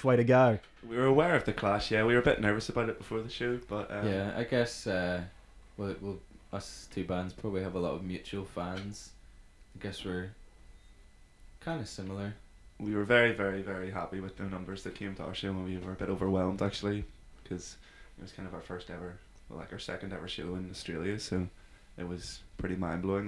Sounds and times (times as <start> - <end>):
Speech: 0.0 - 9.2, 9.8 - 10.4, 11.6 - 23.2.